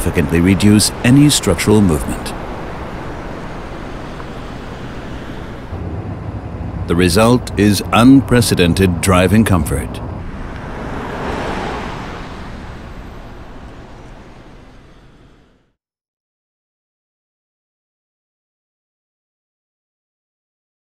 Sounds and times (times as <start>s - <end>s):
Speech: 0.0s - 2.4s, 6.9s - 10.0s
Car: 0.0s - 15.8s.